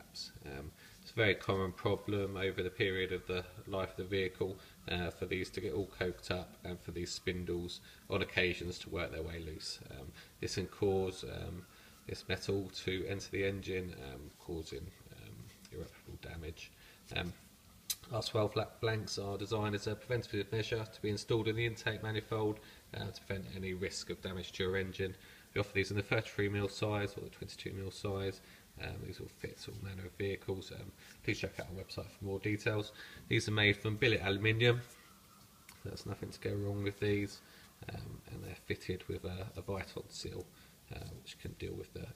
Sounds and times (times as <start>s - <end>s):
Speech: 0.0s - 35.0s, 35.8s - 42.1s.